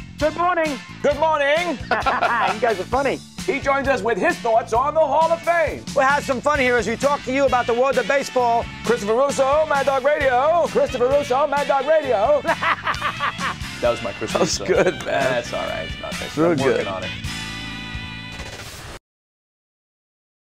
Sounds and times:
Music: 0.0 - 19.0
Speech: 2.4 - 12.4, 13.8 - 17.1.

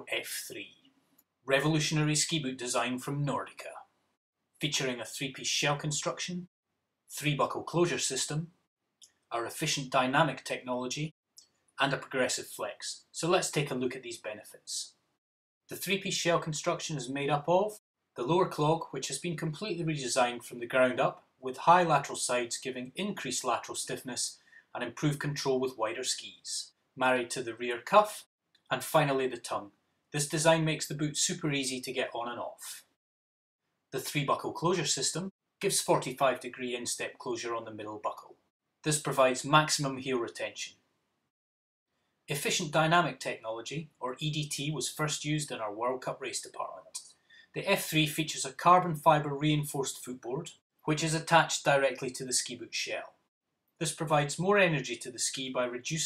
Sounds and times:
Speech: 0.0 - 0.8, 1.5 - 3.9, 4.6 - 6.5, 7.1 - 8.6, 9.3 - 11.2, 11.8 - 15.0, 15.7 - 32.9, 34.0 - 40.8, 42.3 - 53.2, 53.8 - 56.0.

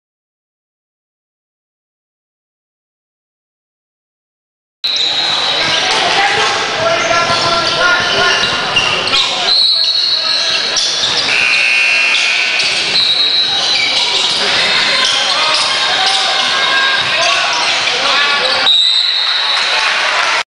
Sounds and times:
Speech: 5.0 - 20.4.

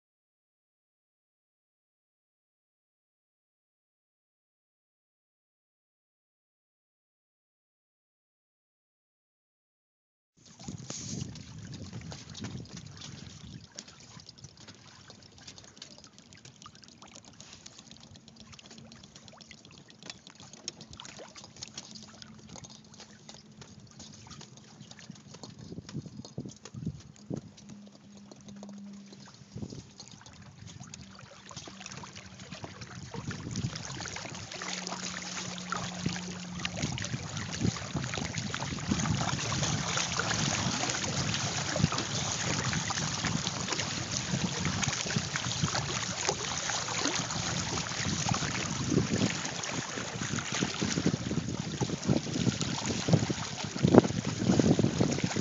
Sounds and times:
Sailboat, sailing ship: 10.4 - 55.4.

